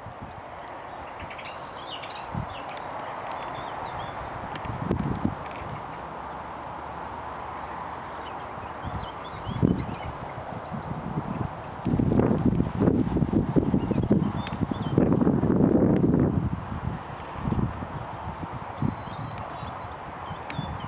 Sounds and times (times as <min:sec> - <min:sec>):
Bird: 0:01.0 - 0:04.3, 0:07.5 - 0:10.8.